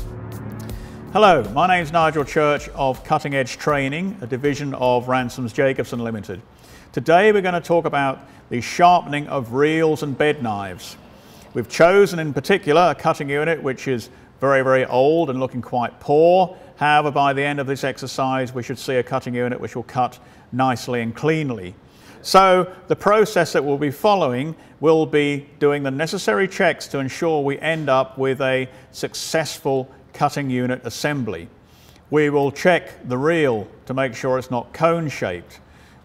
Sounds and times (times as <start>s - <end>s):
Speech: 1.2s - 11.0s, 11.6s - 31.5s, 32.1s - 35.6s.